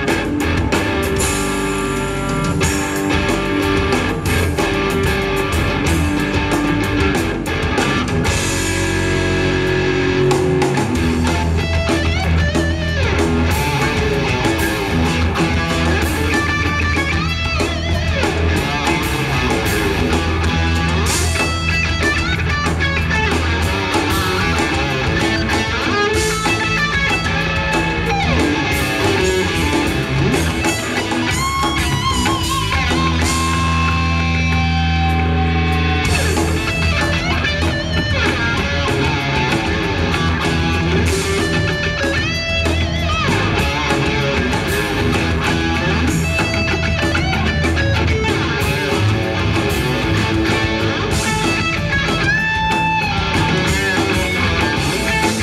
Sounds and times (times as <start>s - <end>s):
Guitar: 0.0s - 55.4s.